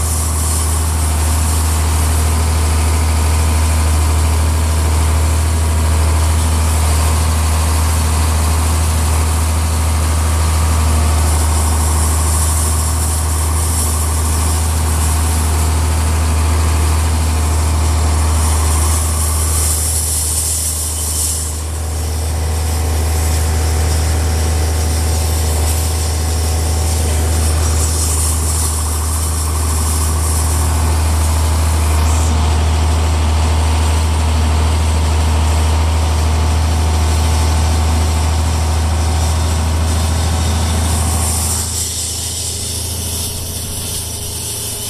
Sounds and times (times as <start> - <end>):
Vehicle: 0.0 - 44.9
Vibration: 0.0 - 44.9.